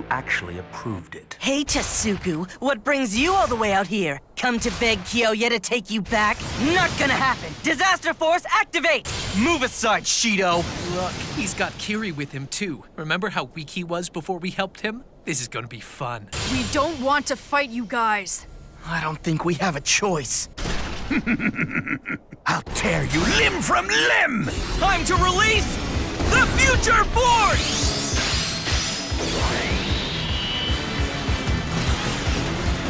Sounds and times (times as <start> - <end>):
Speech: 0.0 - 20.5, 22.4 - 25.7.